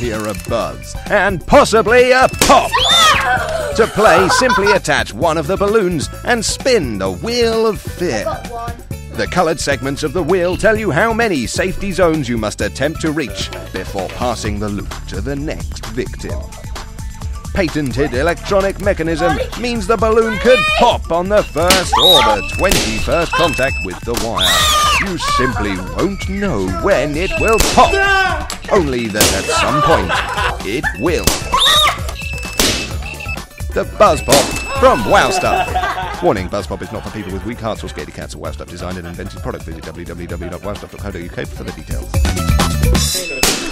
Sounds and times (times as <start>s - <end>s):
Music: 0.0s - 43.7s.